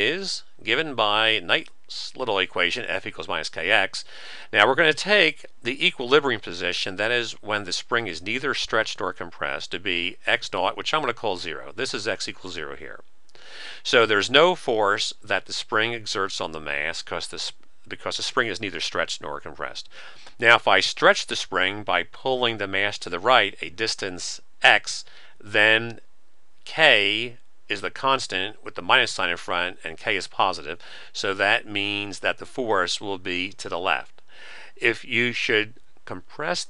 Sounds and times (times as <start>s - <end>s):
Speech: 0.0s - 13.0s, 13.8s - 26.0s, 26.7s - 36.6s.